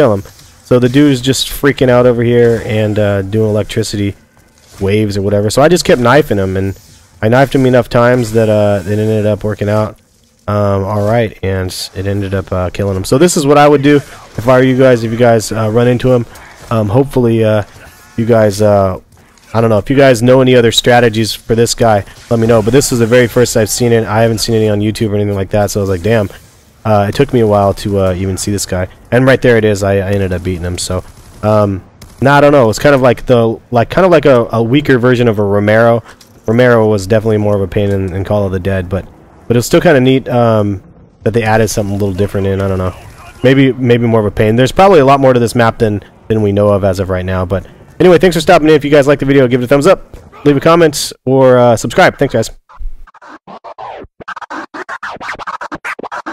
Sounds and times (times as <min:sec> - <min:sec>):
Speech: 0:00.0 - 0:04.2, 0:04.8 - 0:52.6.